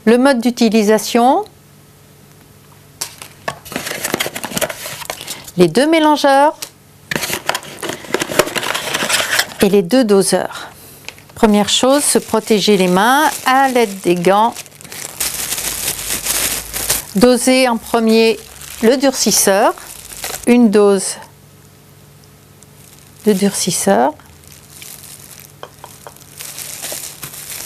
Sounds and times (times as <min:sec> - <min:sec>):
Speech: 0:00.0 - 0:01.6, 0:05.6 - 0:06.6, 0:09.6 - 0:10.7, 0:11.4 - 0:14.6, 0:17.2 - 0:19.8, 0:20.5 - 0:21.3, 0:23.2 - 0:24.2.